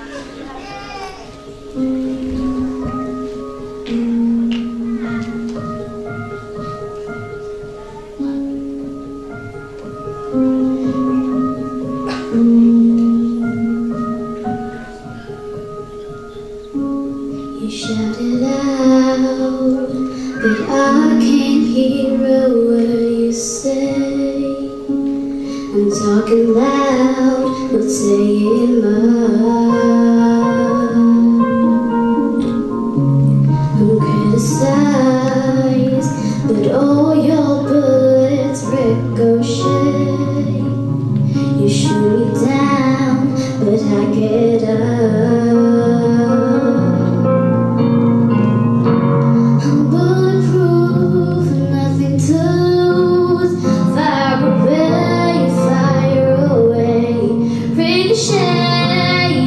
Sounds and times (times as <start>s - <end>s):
Music: 0.0s - 59.4s
Female singing: 17.6s - 24.8s, 25.7s - 31.8s, 33.7s - 40.8s, 41.6s - 47.0s, 49.6s - 59.4s.